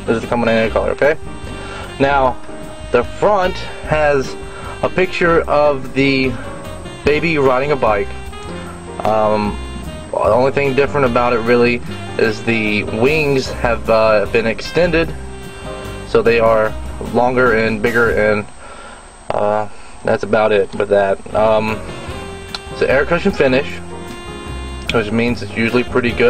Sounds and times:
Speech: 0:00.0 - 0:01.2, 0:02.0 - 0:02.4, 0:03.0 - 0:06.4, 0:07.0 - 0:08.1, 0:09.0 - 0:15.2, 0:16.1 - 0:18.5, 0:19.3 - 0:21.8, 0:22.8 - 0:23.8, 0:24.9 - 0:26.3
Music: 0:00.0 - 0:18.4, 0:21.3 - 0:26.3.

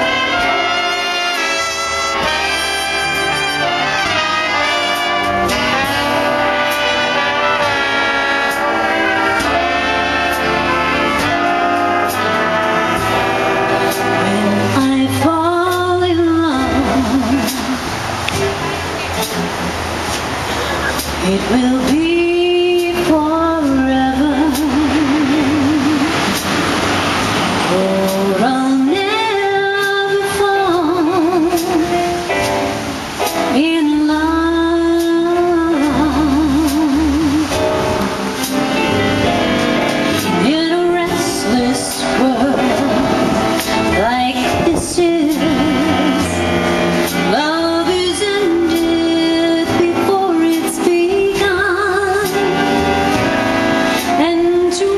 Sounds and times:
Music: 0:00.0 - 0:54.9
Rustle: 0:00.1 - 0:54.9.

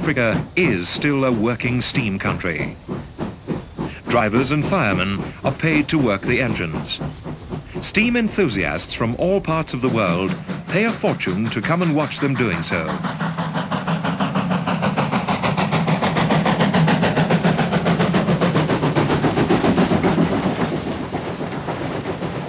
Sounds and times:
Speech: 0:00.0 - 0:02.8, 0:04.0 - 0:07.0, 0:07.8 - 0:13.0.

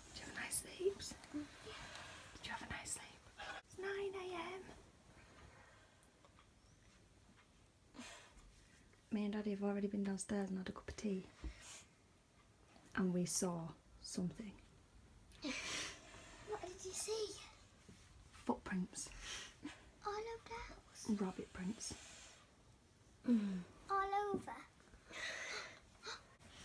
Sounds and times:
Inside, small room: 0:00.0 - 0:26.6.

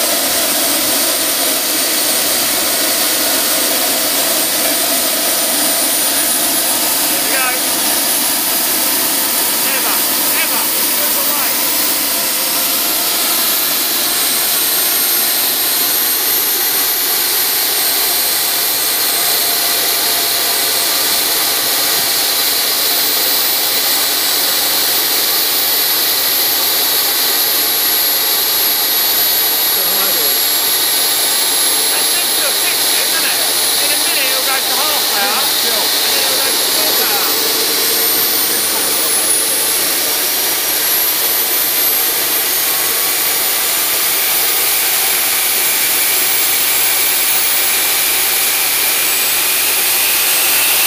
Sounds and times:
Idling: 0:00.0 - 0:50.8.

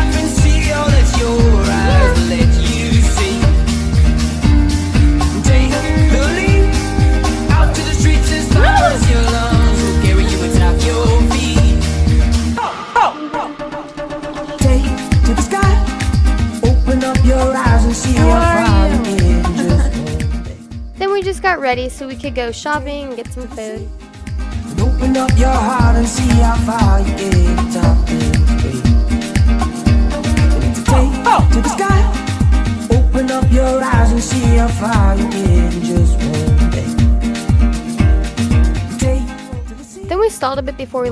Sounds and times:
Afrobeat: 0:00.0 - 0:12.6, 0:13.4 - 0:41.1
Speech: 0:01.7 - 0:02.3, 0:18.2 - 0:20.0, 0:21.0 - 0:23.8, 0:40.0 - 0:41.1.

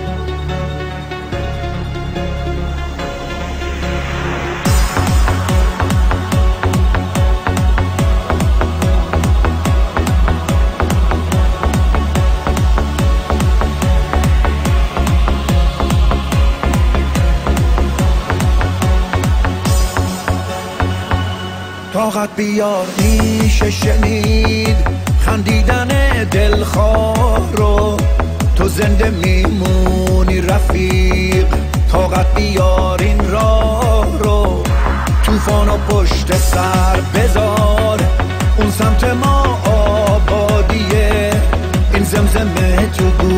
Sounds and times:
Music: 0:00.0 - 0:43.3.

